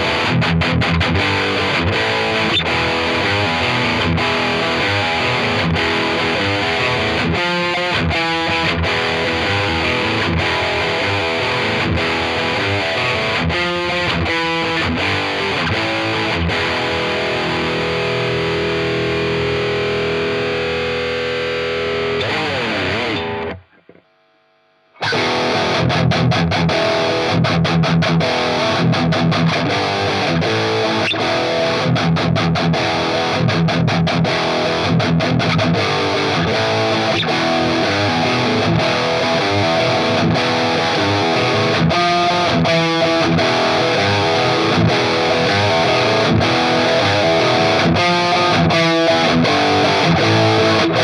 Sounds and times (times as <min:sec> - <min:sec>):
Electric guitar: 0:00.0 - 0:24.2, 0:25.0 - 0:51.0.